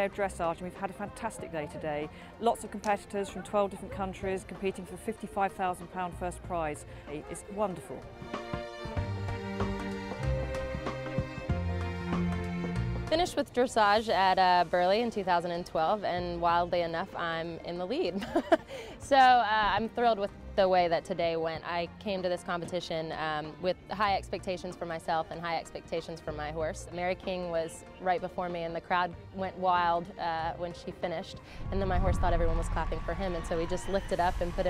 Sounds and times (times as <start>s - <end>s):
Speech: 0.0s - 8.1s, 19.0s - 34.7s
Music: 0.0s - 34.7s.